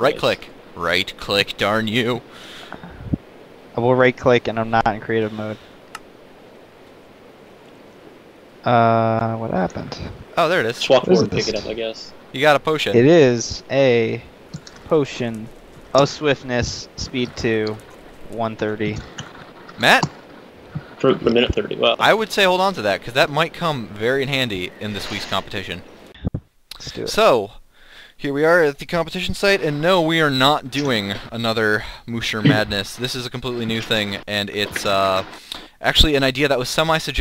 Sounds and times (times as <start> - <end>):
Speech: 0.0 - 2.2, 3.8 - 5.6, 8.7 - 14.2, 14.9 - 19.2, 19.8 - 20.1, 20.9 - 27.6, 28.2 - 37.2.